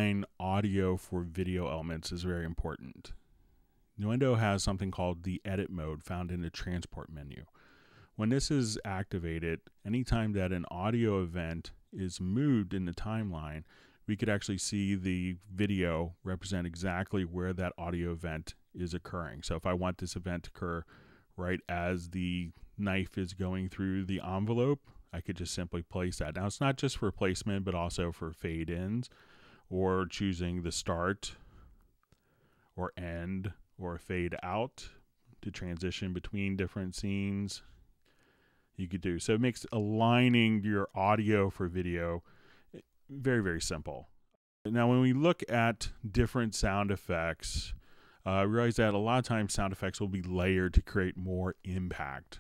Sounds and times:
Speech: 0:00.0 - 0:03.2, 0:04.0 - 0:07.6, 0:08.2 - 0:31.4, 0:32.8 - 0:37.8, 0:38.8 - 0:52.4.

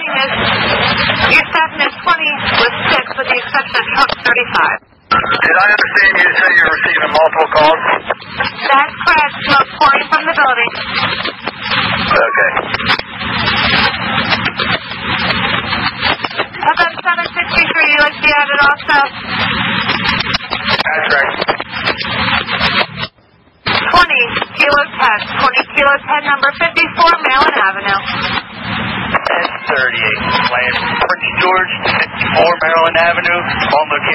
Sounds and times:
Speech: 0:01.2 - 0:10.8, 0:12.1 - 0:12.7, 0:16.3 - 0:19.2, 0:20.8 - 0:21.5, 0:23.8 - 0:28.2, 0:29.2 - 0:34.1.

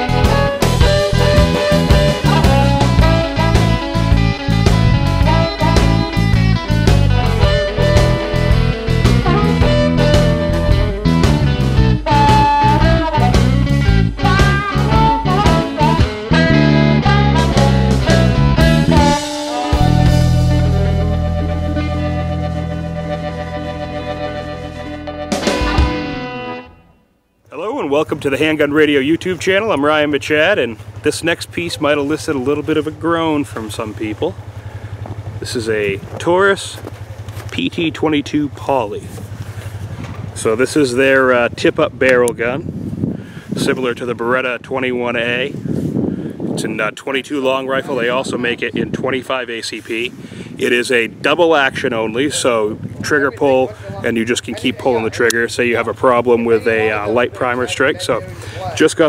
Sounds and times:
Music: 0:00.0 - 0:27.3
Speech: 0:27.5 - 0:34.4, 0:35.4 - 0:36.8, 0:37.5 - 0:39.2, 0:40.4 - 0:42.6, 0:43.6 - 0:45.5, 0:46.6 - 0:59.0.

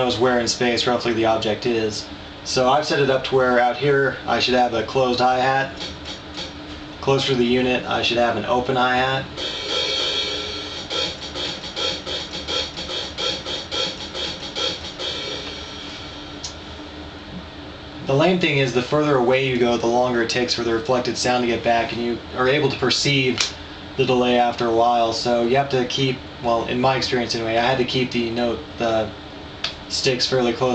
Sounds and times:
Speech: 0:00.0 - 0:05.8, 0:07.0 - 0:09.3, 0:18.0 - 0:29.2, 0:29.9 - 0:30.7.

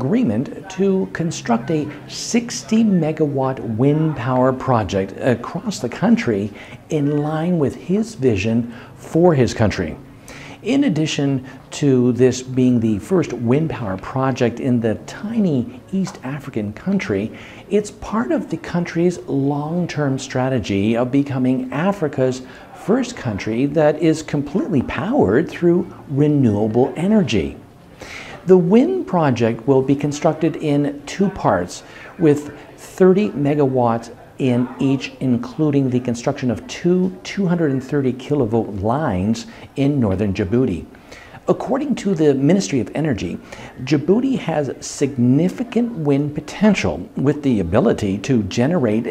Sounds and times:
Speech: 0:00.0 - 0:27.7, 0:28.3 - 0:49.1.

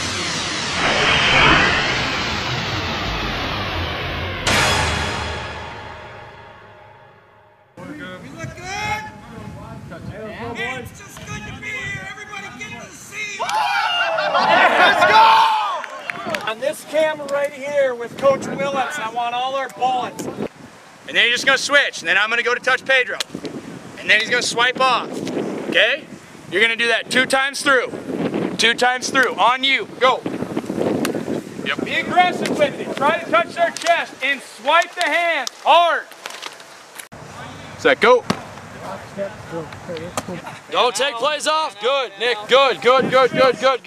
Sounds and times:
Speech: 0:07.8 - 0:13.6, 0:16.1 - 0:20.4, 0:24.0 - 0:25.1, 0:31.6 - 0:36.1, 0:37.3 - 0:43.8.

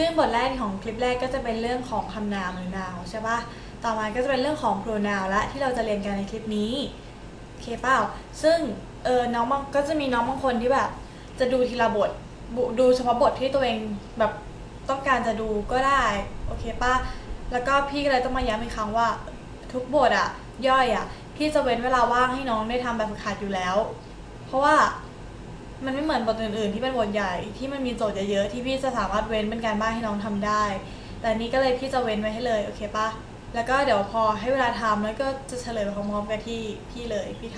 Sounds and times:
Female speech, woman speaking: 0:00.0 - 0:07.0, 0:07.6 - 0:25.1, 0:25.8 - 0:37.5
Narration, monologue: 0:00.0 - 0:37.5.

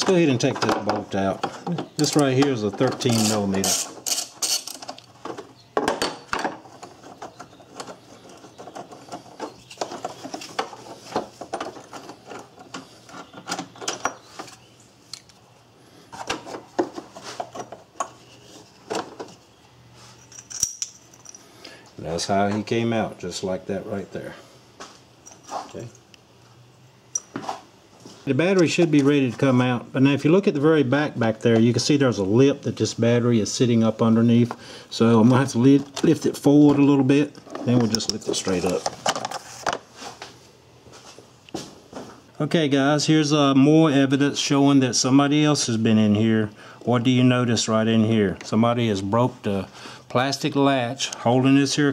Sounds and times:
Speech: 0:00.0 - 0:03.8, 0:22.0 - 0:24.4, 0:25.7 - 0:26.0, 0:28.2 - 0:38.9, 0:42.4 - 0:51.9.

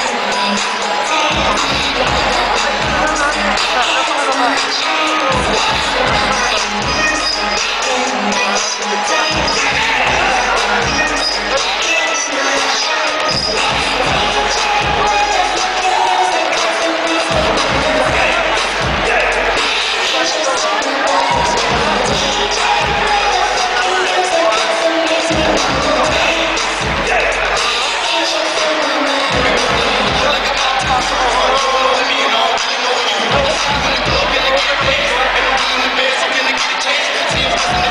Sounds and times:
Cheering: 0:00.0 - 0:37.9
Hip hop music: 0:00.0 - 0:37.9
Speech: 0:00.0 - 0:37.9.

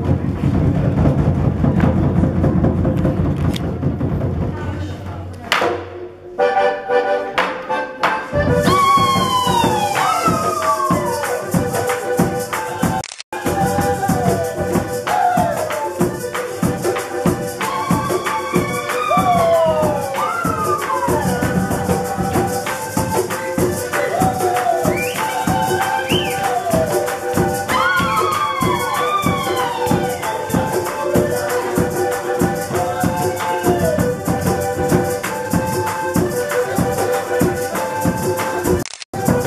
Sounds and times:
Music of Latin America: 0:00.0 - 0:39.4.

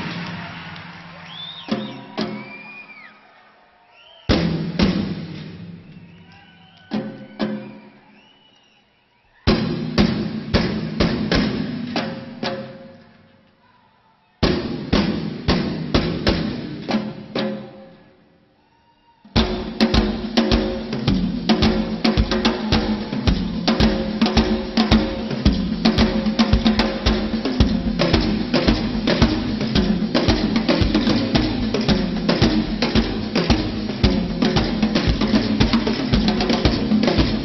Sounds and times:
Drum: 0:00.0 - 0:02.7, 0:04.3 - 0:05.9, 0:09.5 - 0:12.9, 0:14.4 - 0:17.8, 0:19.4 - 0:37.4
Drum kit: 0:00.0 - 0:02.9, 0:04.2 - 0:08.0, 0:09.5 - 0:13.0, 0:14.4 - 0:17.9, 0:19.3 - 0:37.4.

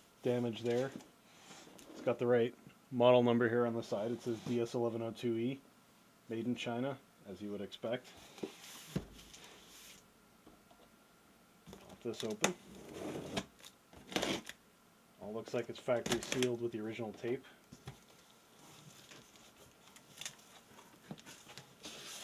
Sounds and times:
Speech: 0:00.2 - 0:01.0, 0:02.0 - 0:05.6, 0:06.3 - 0:08.1, 0:11.9 - 0:12.6, 0:15.2 - 0:17.6.

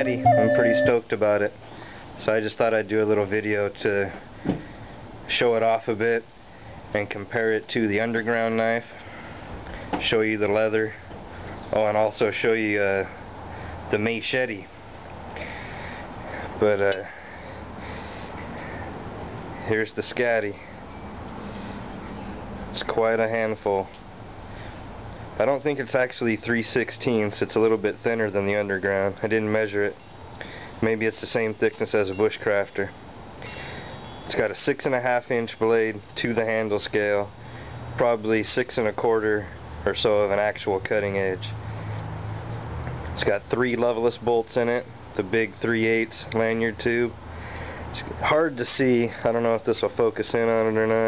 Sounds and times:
Speech: 0:00.0 - 0:01.6, 0:02.2 - 0:04.2, 0:05.3 - 0:06.3, 0:06.9 - 0:08.9, 0:10.0 - 0:11.1, 0:11.7 - 0:13.2, 0:13.9 - 0:14.7, 0:16.6 - 0:17.1, 0:19.6 - 0:20.7, 0:22.7 - 0:24.0, 0:25.4 - 0:30.0, 0:30.8 - 0:33.0, 0:34.3 - 0:37.3, 0:38.0 - 0:41.5, 0:43.2 - 0:47.2, 0:48.0 - 0:51.0.

